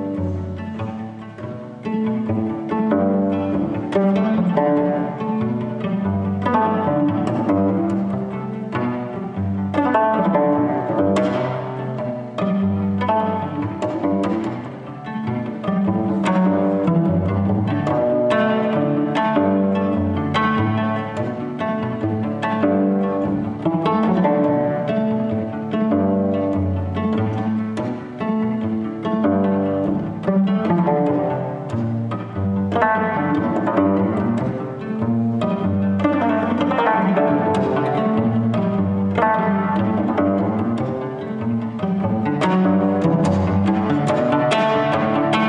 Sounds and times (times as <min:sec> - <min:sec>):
Cello: 0:00.0 - 0:45.4
Pizzicato: 0:00.0 - 0:45.4.